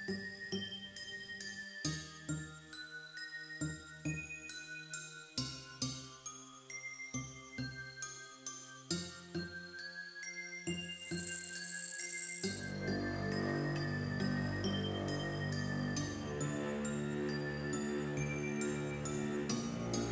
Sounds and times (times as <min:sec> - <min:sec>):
Jingle, tinkle: 0:00.0 - 0:20.1.